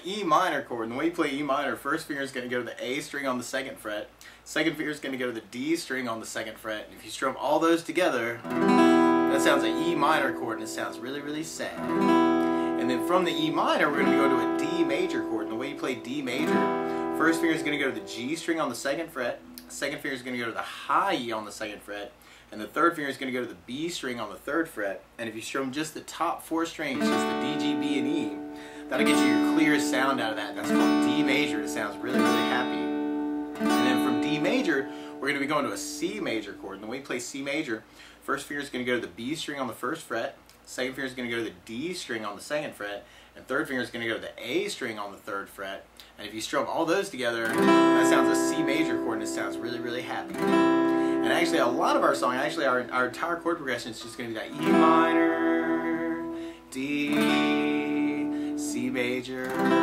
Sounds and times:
Speech: 0:00.0 - 0:08.5, 0:09.3 - 0:11.8, 0:12.8 - 0:16.6, 0:17.2 - 0:33.0, 0:33.7 - 0:50.4, 0:51.2 - 0:59.8
Strum: 0:08.4 - 0:20.2, 0:26.9 - 0:36.6, 0:47.4 - 0:59.8
Acoustic guitar: 0:08.4 - 0:21.3, 0:26.8 - 0:36.8, 0:47.4 - 0:59.8.

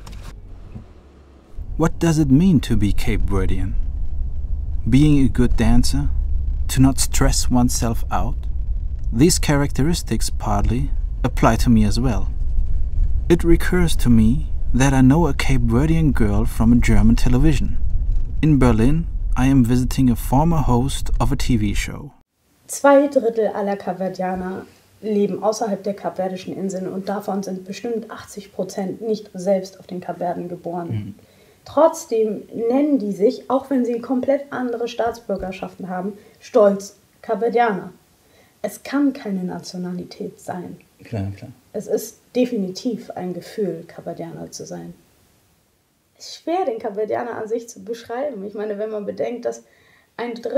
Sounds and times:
Speech: 0:01.8 - 0:03.8, 0:04.9 - 0:06.1, 0:06.7 - 0:08.4, 0:09.2 - 0:12.3, 0:13.3 - 0:17.8, 0:18.4 - 0:38.0, 0:38.6 - 0:45.0, 0:46.2 - 0:50.5.

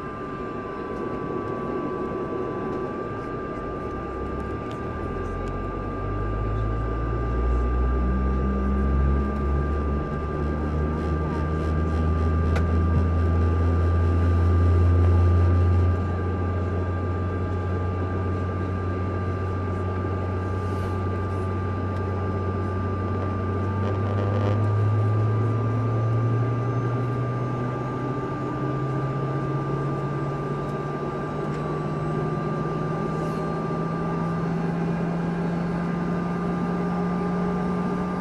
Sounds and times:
Medium engine (mid frequency): 0:00.0 - 0:38.2
Vehicle: 0:00.0 - 0:38.2.

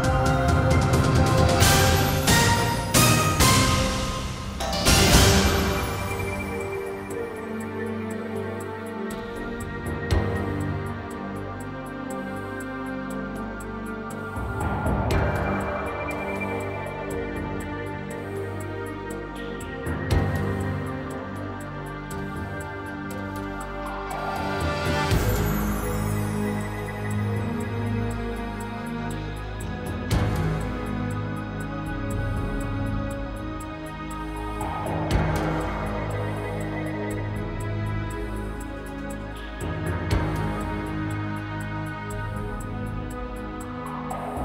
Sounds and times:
Music: 0:00.0 - 0:44.4.

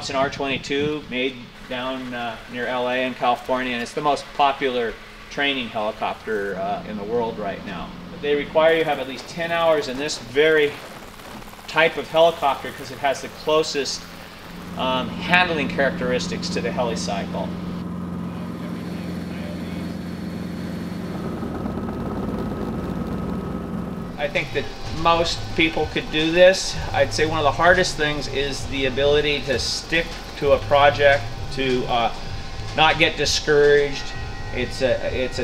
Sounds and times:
Speech: 0:00.0 - 0:10.8, 0:11.7 - 0:14.0, 0:14.8 - 0:17.6, 0:18.3 - 0:20.0, 0:24.2 - 0:32.2, 0:32.8 - 0:35.4
Helicopter: 0:00.0 - 0:35.4.

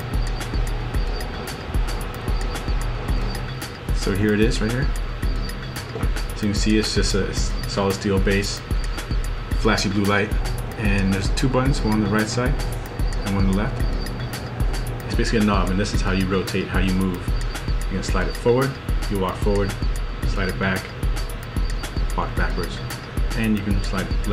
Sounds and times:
Music: 0:00.0 - 0:24.3
Speech: 0:04.0 - 0:04.9, 0:06.4 - 0:08.6, 0:09.6 - 0:12.6, 0:13.2 - 0:13.8, 0:15.1 - 0:17.3, 0:17.9 - 0:20.9, 0:22.2 - 0:22.8, 0:23.4 - 0:24.3.

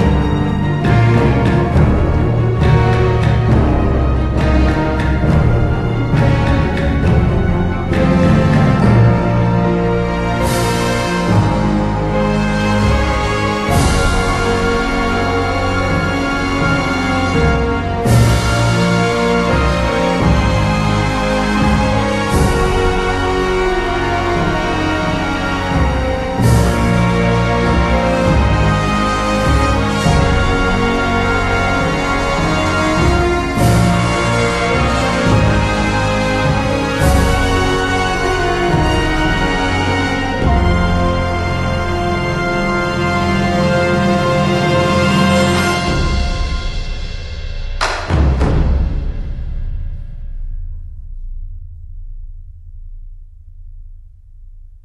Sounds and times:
Theme music: 0:00.0 - 0:51.2
Soundtrack music: 0:00.0 - 0:54.0.

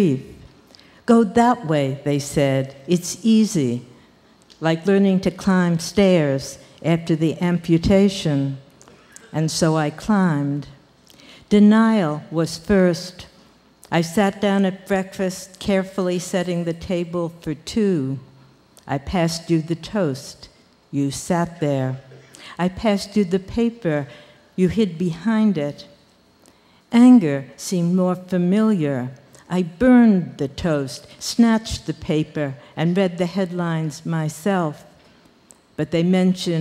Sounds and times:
Speech: 0:00.0 - 0:00.5, 0:01.1 - 0:03.9, 0:04.6 - 0:10.8, 0:11.5 - 0:13.3, 0:13.9 - 0:26.0, 0:26.9 - 0:35.0, 0:35.8 - 0:36.6.

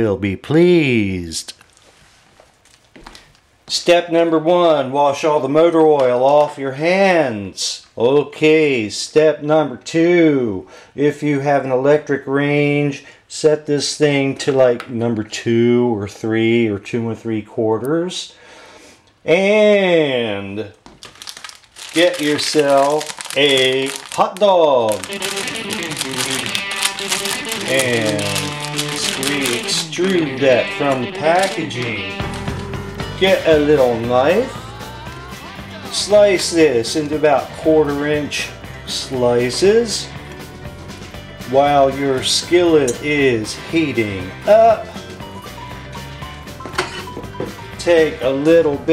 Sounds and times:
Speech: 0:00.0 - 0:01.6, 0:03.7 - 0:18.3, 0:19.2 - 0:20.8, 0:21.9 - 0:26.5, 0:27.6 - 0:32.1, 0:33.2 - 0:34.6, 0:35.9 - 0:40.2, 0:41.4 - 0:44.9, 0:47.8 - 0:48.9.

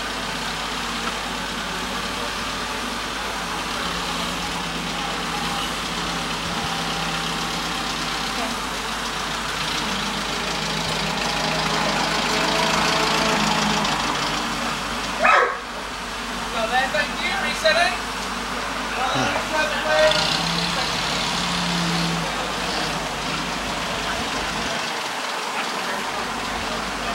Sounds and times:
Outside, urban or manmade: 0:00.0 - 0:27.1
Speech: 0:16.5 - 0:18.0, 0:18.9 - 0:21.3, 0:23.8 - 0:27.1.

